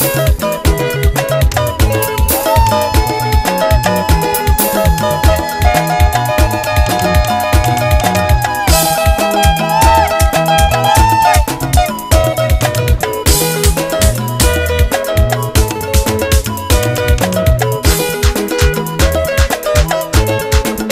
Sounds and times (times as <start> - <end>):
Music of Africa: 0.0 - 20.9.